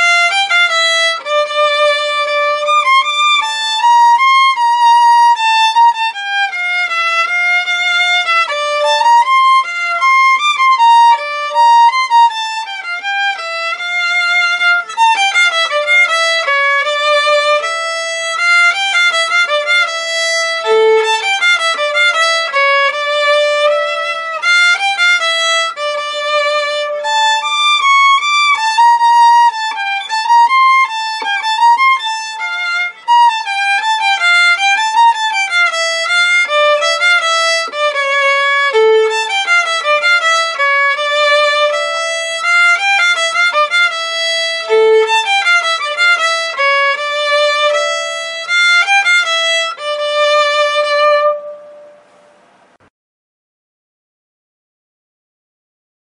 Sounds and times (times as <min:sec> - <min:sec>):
Violin, fiddle: 0:00.0 - 0:52.8.